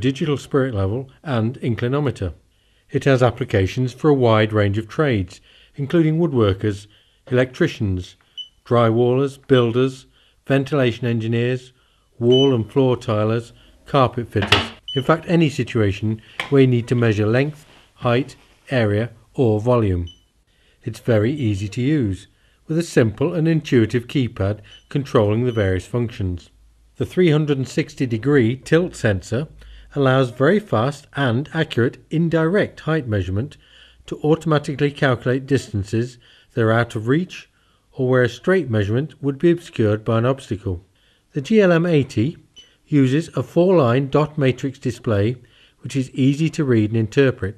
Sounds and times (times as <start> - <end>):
Speech: 0.0 - 20.2, 20.8 - 47.5.